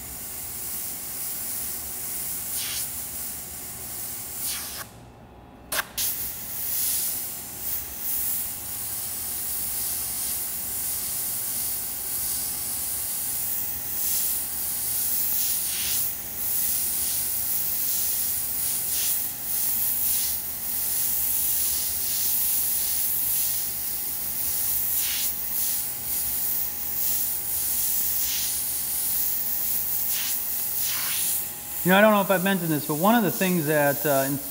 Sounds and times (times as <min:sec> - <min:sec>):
Steam: 0:06.0 - 0:34.5.